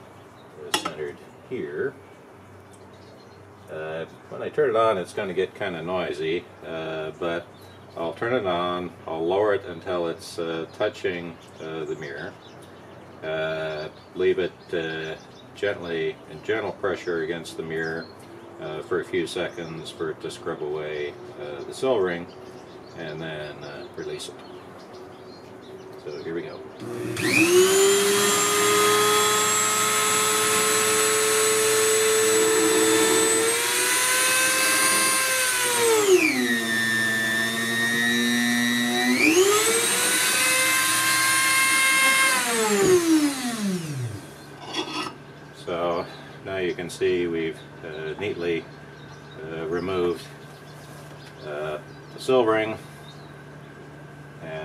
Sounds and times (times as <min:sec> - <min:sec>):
Drill: 0:26.8 - 0:44.5.